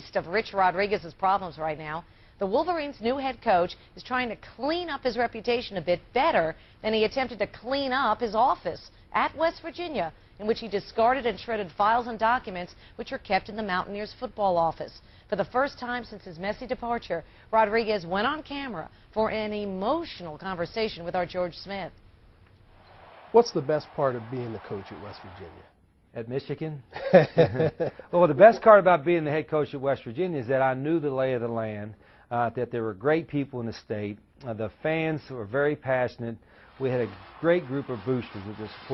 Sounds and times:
Speech: 23.4s - 26.8s, 28.2s - 38.9s.

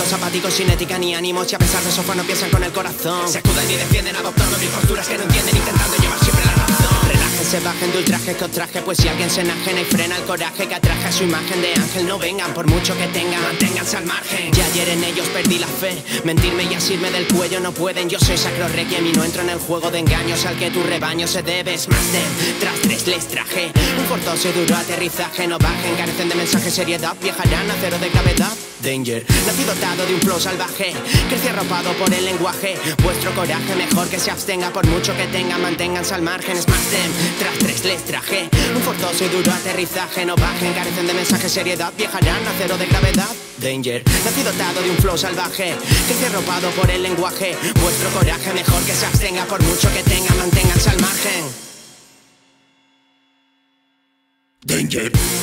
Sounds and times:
Music: 0.0s - 55.4s.

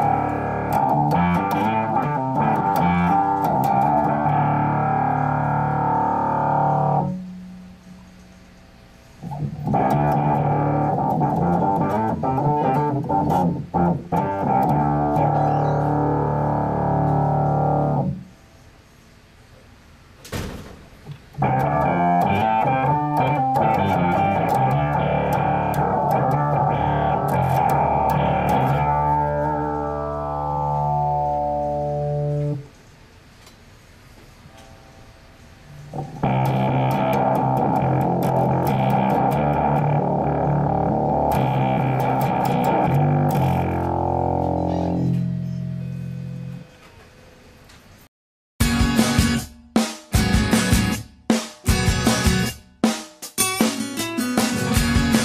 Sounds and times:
Rhythm and blues: 0.0s - 7.2s, 9.2s - 18.2s, 21.2s - 32.7s, 35.9s - 45.4s, 48.6s - 55.2s.

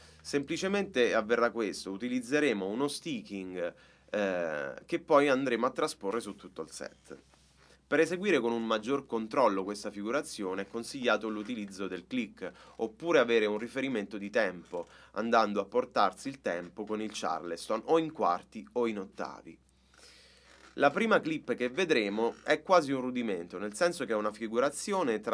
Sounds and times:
Speech: 0.3s - 7.2s, 7.9s - 19.6s, 20.8s - 25.3s.

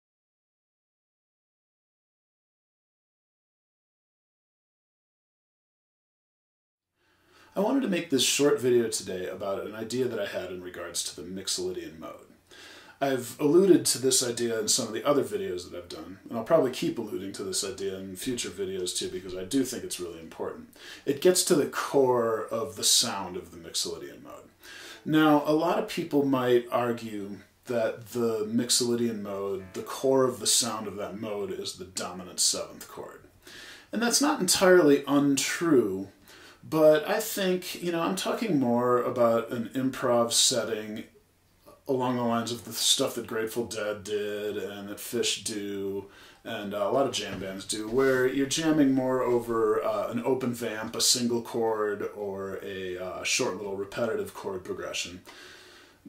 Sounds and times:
Speech: 7.5s - 12.4s, 13.0s - 33.3s, 33.9s - 55.3s.

